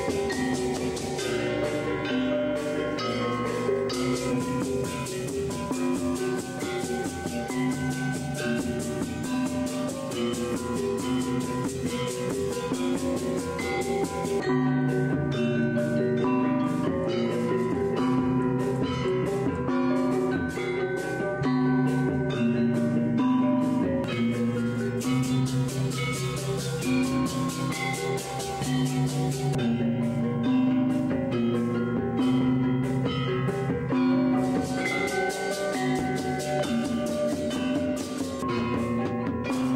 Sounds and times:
Gong: 0.0s - 39.7s.

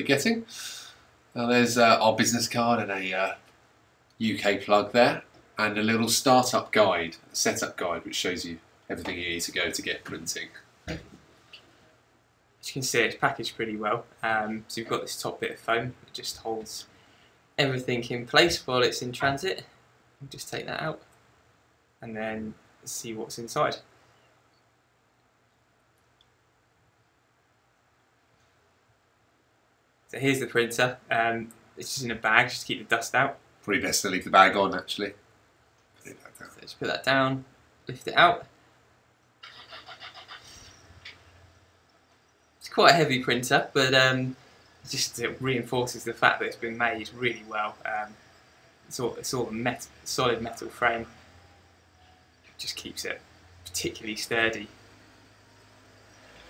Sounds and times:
Speech: 0.0s - 0.5s, 1.4s - 3.4s, 4.2s - 11.0s, 12.6s - 16.9s, 17.6s - 21.1s, 22.0s - 23.8s, 30.1s - 35.2s, 36.1s - 38.5s, 42.6s - 48.2s, 48.9s - 51.2s, 52.6s - 54.8s.

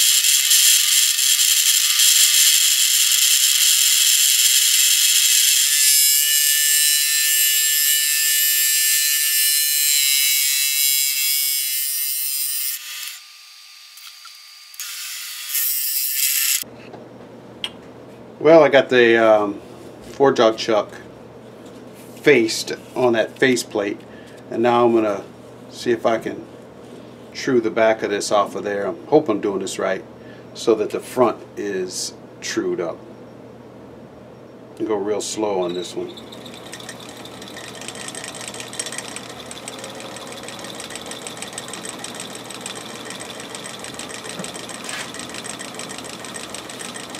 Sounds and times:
Power tool: 0.0s - 16.7s, 35.6s - 47.1s
Speech: 18.4s - 21.1s, 22.2s - 26.5s, 27.4s - 33.0s, 34.8s - 36.1s.

